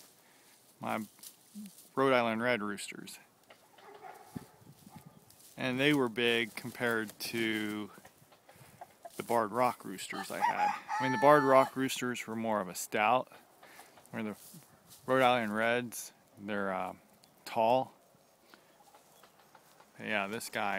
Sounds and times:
Crowing, cock-a-doodle-doo: 10.2s - 11.8s.

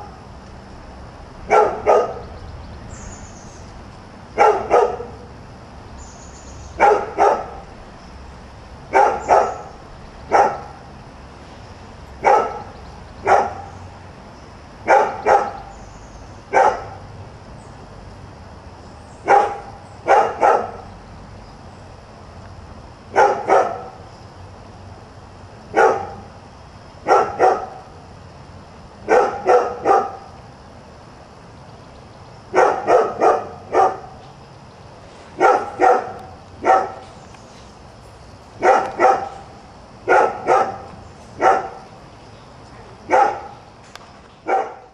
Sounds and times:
Yip: 1.5s - 2.2s, 4.4s - 5.2s, 6.8s - 7.6s, 8.9s - 9.7s, 10.3s - 10.7s, 12.2s - 12.7s, 13.3s - 13.7s, 14.9s - 15.6s, 16.5s - 17.0s, 19.3s - 20.8s, 23.2s - 23.9s, 25.8s - 26.2s, 27.1s - 27.8s, 29.1s - 30.3s, 32.6s - 34.1s, 35.4s - 37.0s, 38.6s - 39.4s, 40.1s - 41.8s, 43.1s - 43.6s, 44.5s - 44.9s.

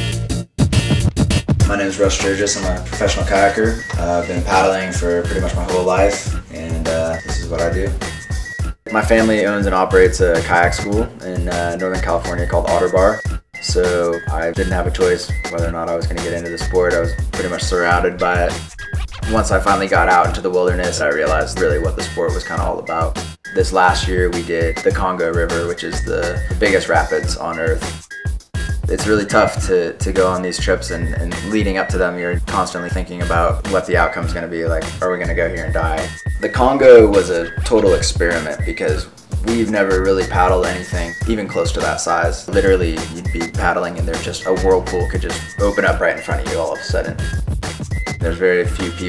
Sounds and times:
Music: 0.0s - 49.0s
Speech: 1.6s - 8.0s, 8.9s - 18.6s, 19.3s - 27.9s, 28.9s - 47.2s, 48.2s - 49.0s.

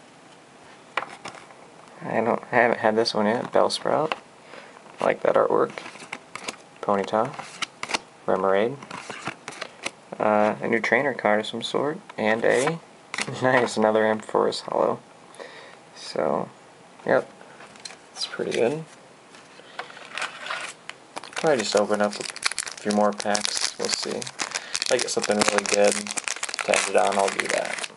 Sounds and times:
Inside, small room: 0.0s - 27.9s
Speech: 2.0s - 4.2s, 5.0s - 5.8s, 6.8s - 7.4s, 8.3s - 8.8s, 10.2s - 15.0s, 16.0s - 17.3s, 18.2s - 18.9s, 21.4s - 24.3s, 24.9s - 27.9s.

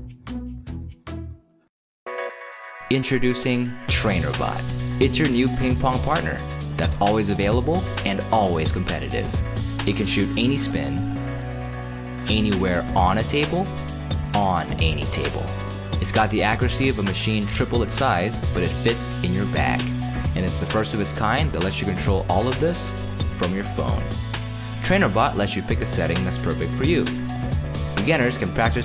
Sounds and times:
Music: 0.0s - 28.8s
Speech: 2.9s - 11.1s, 12.2s - 13.7s, 14.3s - 24.1s, 24.8s - 27.2s, 28.0s - 28.8s.

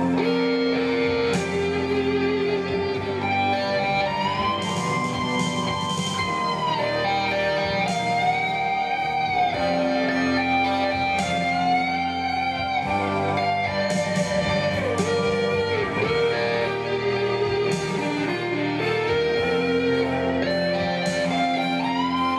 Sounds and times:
Music: 0.0s - 22.3s.

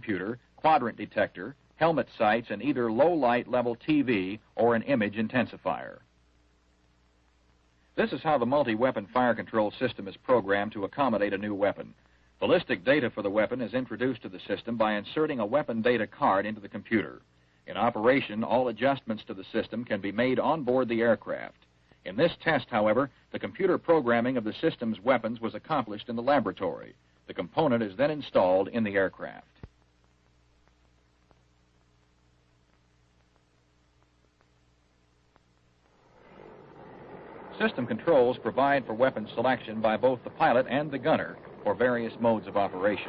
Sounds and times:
Speech: 0.0s - 6.1s, 8.0s - 29.6s, 37.6s - 43.0s.

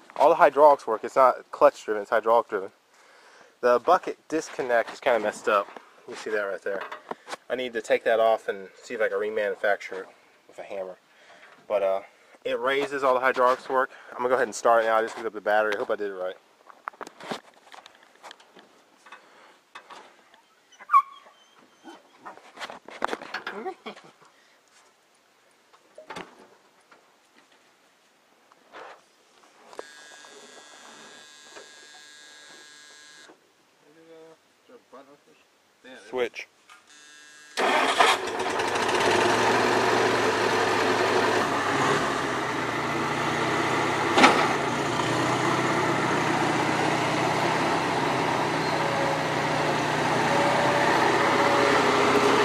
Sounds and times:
Outside, rural or natural: 0.0s - 52.4s
Speech: 0.2s - 2.8s, 3.6s - 6.9s, 7.5s - 11.0s, 11.7s - 16.4s, 33.8s - 36.5s.

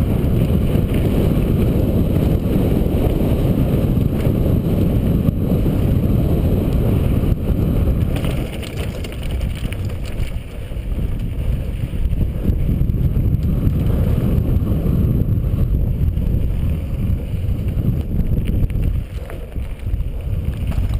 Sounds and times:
Vehicle: 0.0s - 21.0s.

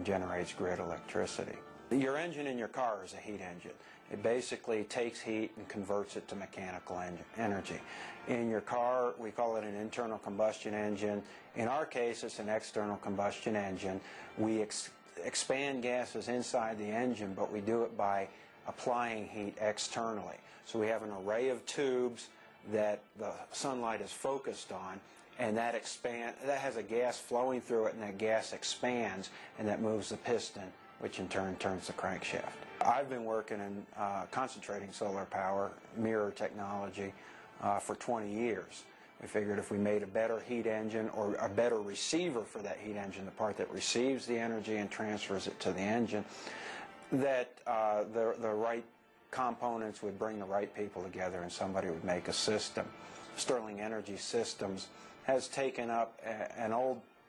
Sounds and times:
Speech: 0.0s - 46.3s, 47.1s - 57.1s
Music: 0.0s - 57.2s.

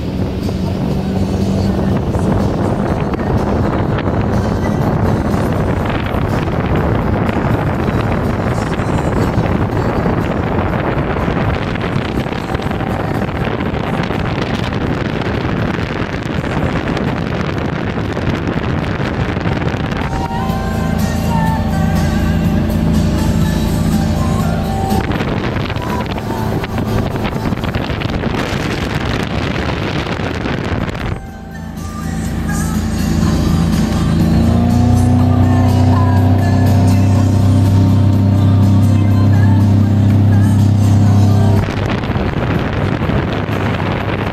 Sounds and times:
Motorboat, speedboat: 0.0s - 44.3s
Music: 0.0s - 44.3s.

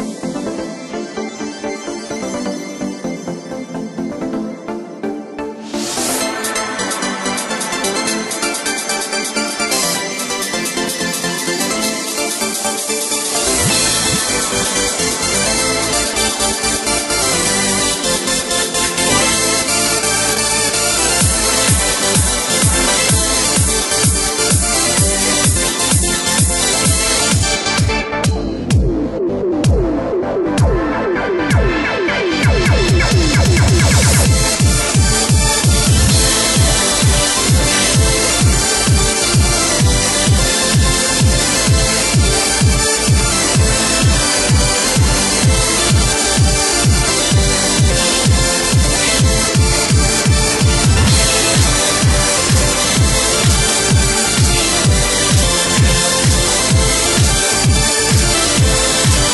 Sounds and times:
Music: 0.0s - 59.3s.

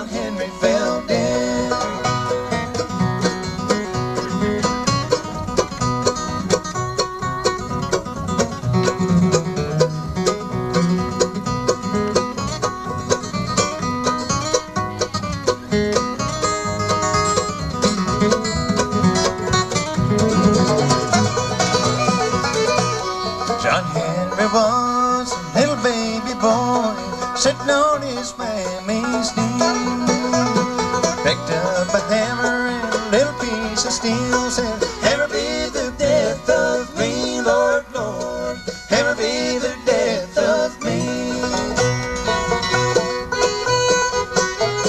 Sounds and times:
Banjo: 0.0s - 44.8s
Country: 0.0s - 44.8s.

